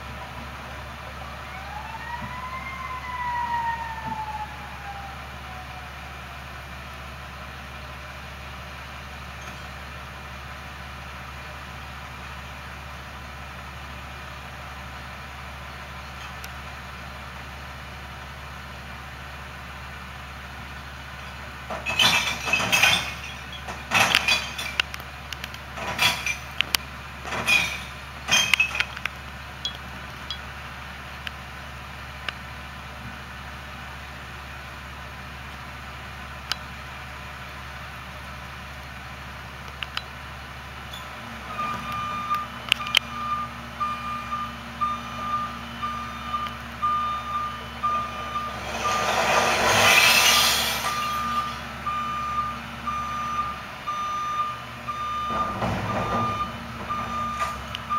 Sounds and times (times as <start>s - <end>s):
Truck: 0.0s - 57.9s.